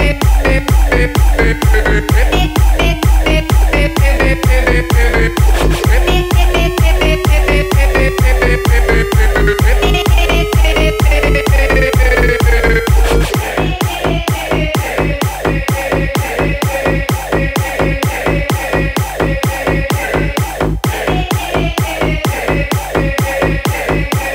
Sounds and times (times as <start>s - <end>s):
Electronic dance music: 0.0s - 24.3s.